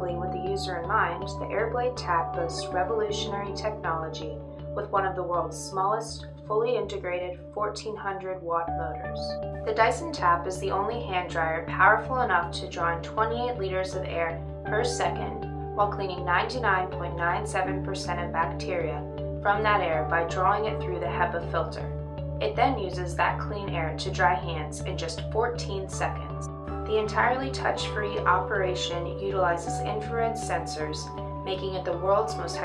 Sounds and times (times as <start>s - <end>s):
Music: 0.0s - 32.6s
Speech: 0.0s - 32.6s.